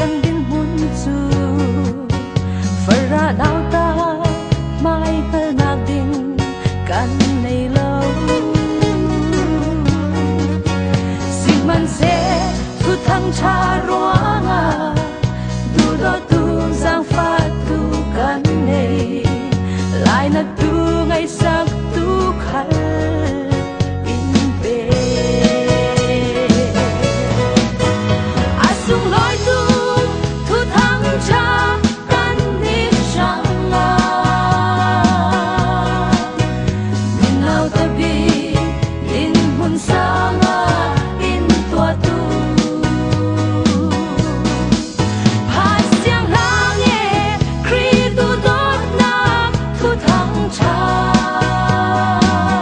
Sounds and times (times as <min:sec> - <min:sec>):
Music: 0:00.0 - 0:52.6
Singing: 0:37.2 - 0:44.2, 0:45.5 - 0:52.6.